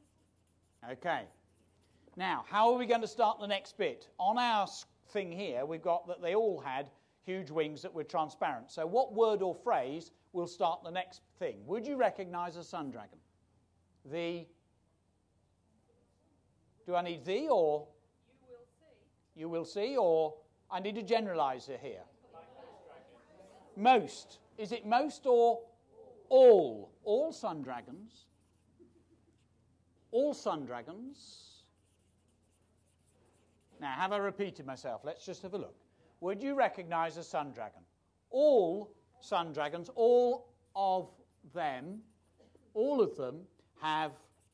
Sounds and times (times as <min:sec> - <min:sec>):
Speech: 0:00.8 - 0:01.4, 0:02.2 - 0:13.2, 0:14.0 - 0:14.6, 0:16.8 - 0:28.3, 0:30.1 - 0:31.7, 0:33.8 - 0:42.1, 0:42.7 - 0:44.4.